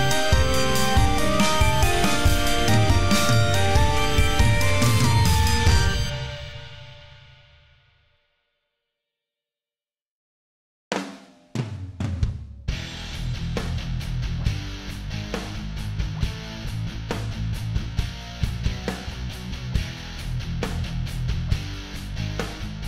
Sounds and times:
Music: 0:00.0 - 0:09.0, 0:11.0 - 0:22.8.

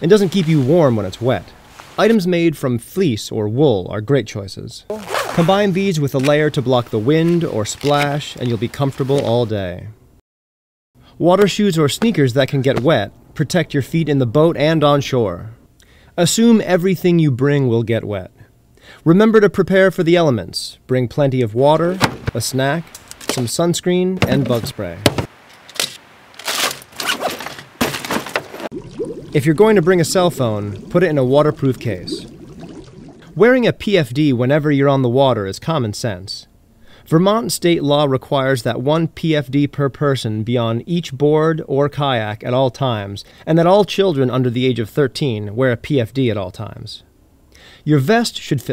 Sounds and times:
Speech: 0:00.0 - 0:10.0, 0:11.2 - 0:15.6, 0:16.2 - 0:25.1, 0:29.4 - 0:32.3, 0:33.3 - 0:36.5, 0:37.1 - 0:47.1, 0:47.9 - 0:48.7.

